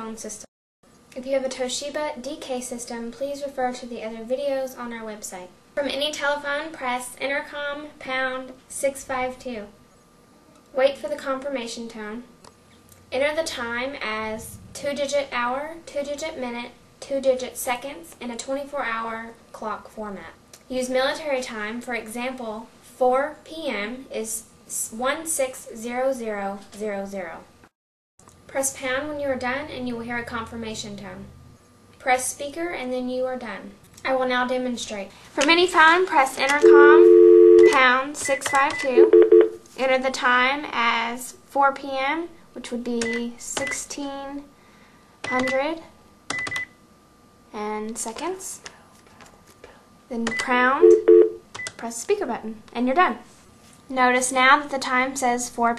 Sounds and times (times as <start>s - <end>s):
Speech: 0.0s - 0.5s, 1.1s - 9.8s, 10.7s - 12.3s, 13.1s - 27.5s, 28.5s - 31.3s, 32.0s - 37.1s, 37.7s - 39.1s, 39.8s - 44.5s, 45.3s - 45.9s, 47.5s - 48.9s, 50.1s - 51.0s, 51.8s - 53.3s, 53.9s - 55.7s.